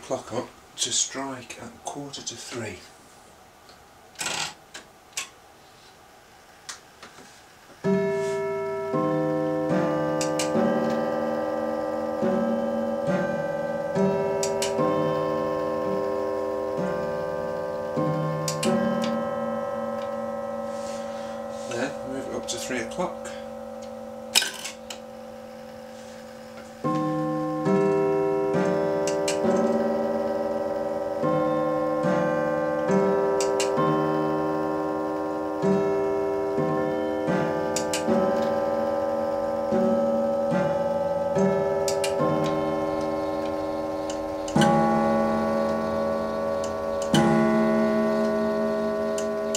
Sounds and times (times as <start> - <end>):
Tick-tock: 9.8 - 11.0, 36.5 - 38.6.